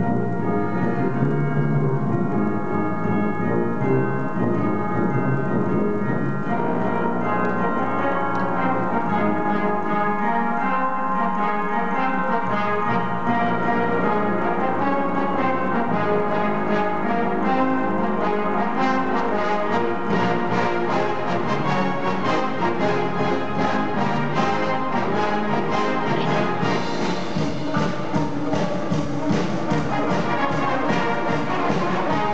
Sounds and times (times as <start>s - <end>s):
Brass instrument: 0.0s - 32.3s
Classical music: 0.0s - 32.3s
Inside, large room or hall: 0.0s - 32.3s
Orchestra: 0.0s - 32.3s.